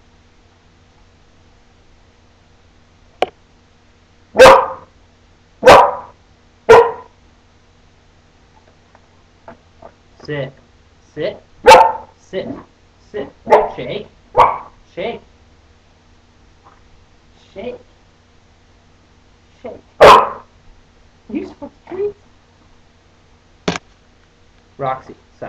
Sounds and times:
Bow-wow: 0:04.4 - 0:04.9, 0:05.6 - 0:07.2, 0:11.6 - 0:12.1, 0:13.5 - 0:14.8, 0:20.0 - 0:20.5
Speech: 0:10.2 - 0:11.5, 0:12.2 - 0:14.2, 0:14.9 - 0:15.3, 0:17.4 - 0:17.9, 0:21.3 - 0:22.2, 0:24.8 - 0:25.4.

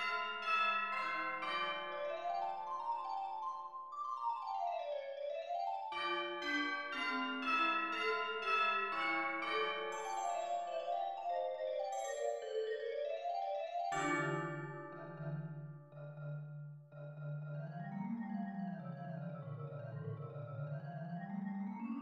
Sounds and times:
Marimba, xylophone: 0:05.8 - 0:12.9, 0:13.9 - 0:15.6.

